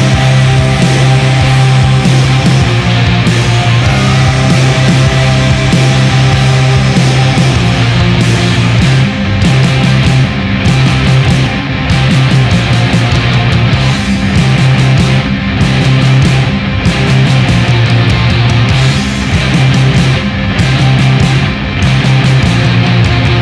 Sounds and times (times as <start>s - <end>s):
Heavy metal: 0.0s - 23.4s.